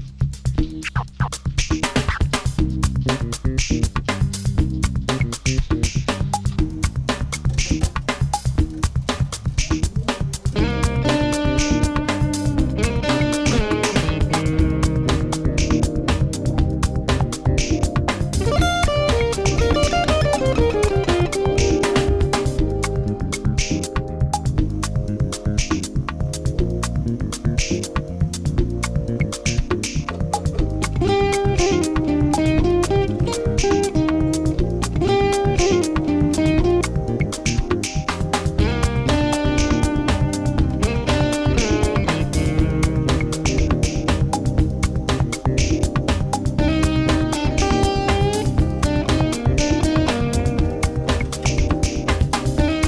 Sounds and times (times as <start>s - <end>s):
Music: 0.0s - 52.8s.